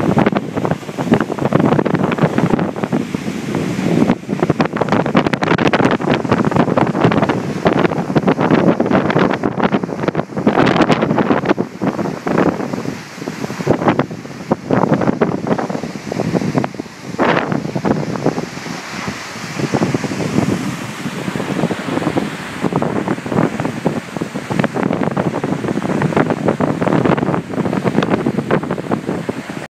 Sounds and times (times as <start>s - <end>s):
Waterfall: 0.0s - 29.7s.